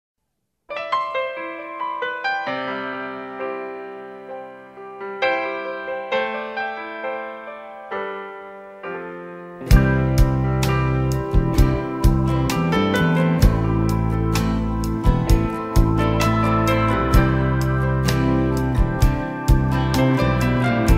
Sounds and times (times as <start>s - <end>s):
Piano: 0.7s - 20.9s.